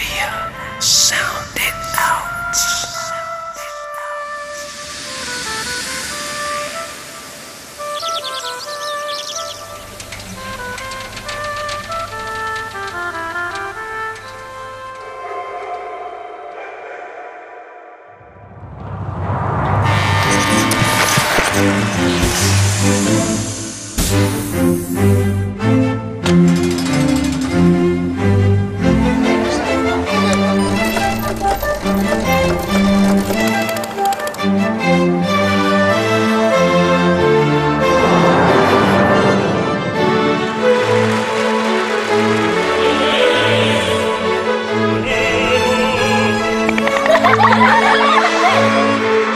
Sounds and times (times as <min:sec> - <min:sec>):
Music: 0:00.0 - 0:16.2, 0:19.2 - 0:49.3.